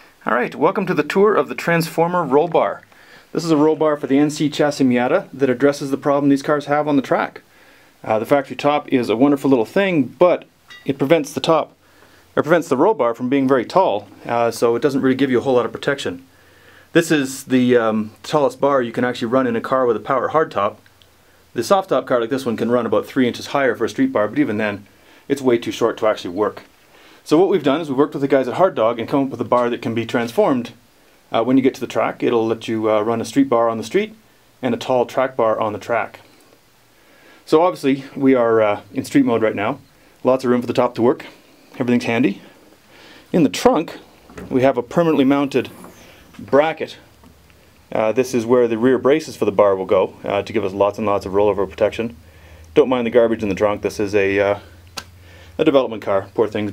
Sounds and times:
Speech: 0:00.2 - 0:07.4, 0:08.0 - 0:11.8, 0:12.4 - 0:16.3, 0:16.9 - 0:20.8, 0:21.6 - 0:36.3, 0:37.5 - 0:42.5, 0:43.3 - 0:47.1, 0:47.9 - 0:52.2, 0:52.8 - 0:54.8, 0:55.6 - 0:56.7.

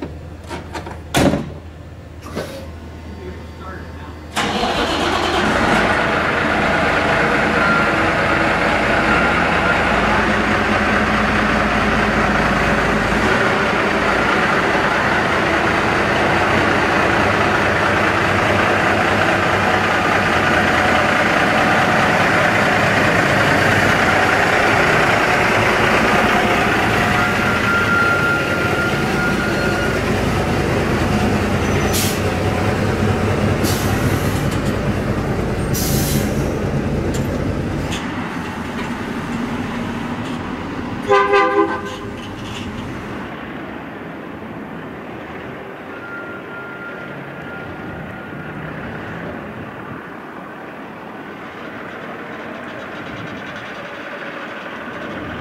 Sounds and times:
Truck: 0:00.0 - 0:55.4.

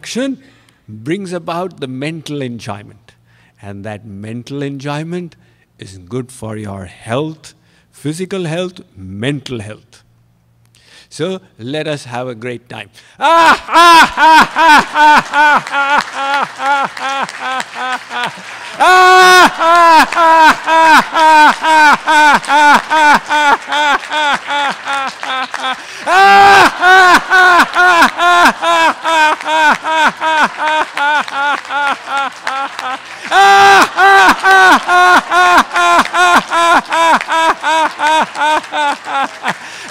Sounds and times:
Speech: 0:00.0 - 0:10.0, 0:11.1 - 0:13.0
Snicker: 0:13.5 - 0:18.6, 0:19.5 - 0:39.6.

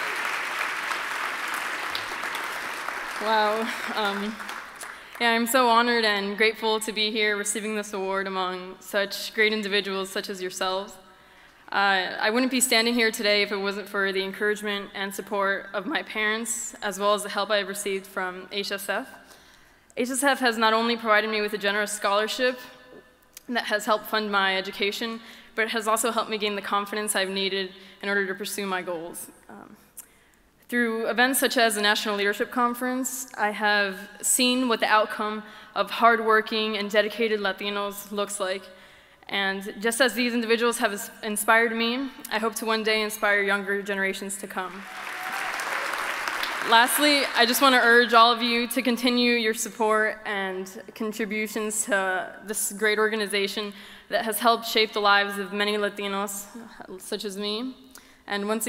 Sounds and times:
Narration, monologue: 0:02.9 - 0:44.9, 0:46.1 - 0:58.6
Female speech, woman speaking: 0:03.2 - 0:04.4, 0:05.2 - 0:11.0, 0:11.8 - 0:19.1, 0:20.0 - 0:22.7, 0:23.4 - 0:29.8, 0:30.7 - 0:38.6, 0:39.3 - 0:44.8, 0:46.6 - 0:58.6.

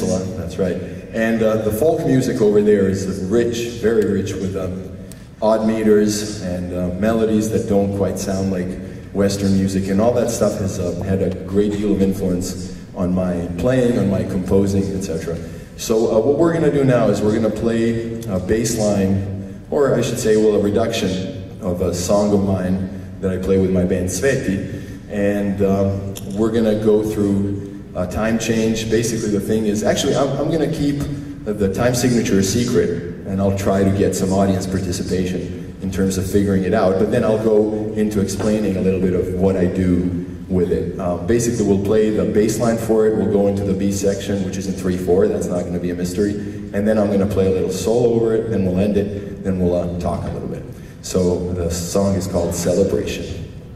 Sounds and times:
Speech: 0:00.0 - 0:53.6.

